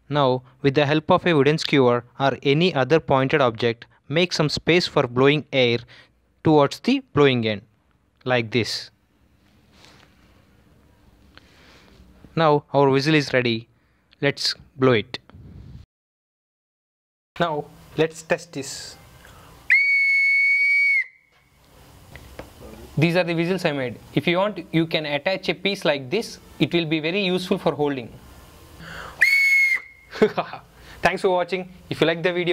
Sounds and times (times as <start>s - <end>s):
Whistle: 19.7s - 21.4s, 29.2s - 30.1s.